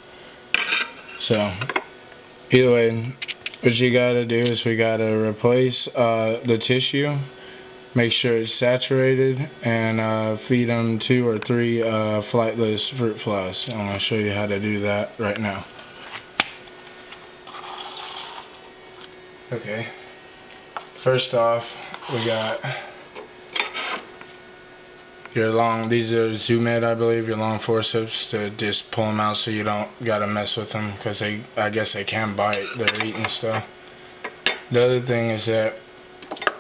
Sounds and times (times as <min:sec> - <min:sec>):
Speech: 0:01.2 - 0:01.8, 0:02.5 - 0:07.4, 0:08.0 - 0:15.7, 0:19.5 - 0:20.0, 0:21.0 - 0:22.9, 0:25.3 - 0:33.7, 0:34.7 - 0:35.8.